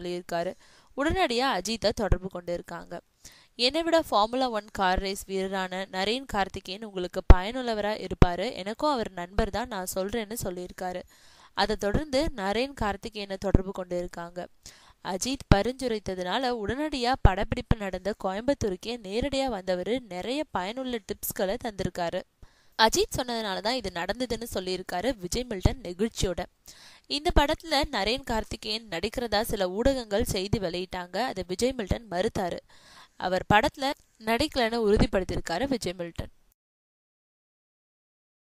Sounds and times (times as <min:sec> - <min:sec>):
Speech: 0:00.0 - 0:03.0, 0:03.6 - 0:11.0, 0:11.6 - 0:14.5, 0:15.1 - 0:26.5, 0:27.1 - 0:32.6, 0:33.2 - 0:36.3.